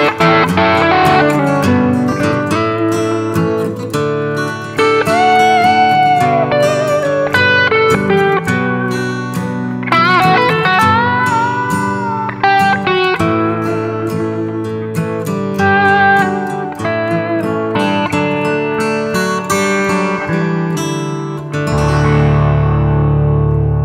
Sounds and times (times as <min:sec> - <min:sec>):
Guitar: 0:00.0 - 0:23.8.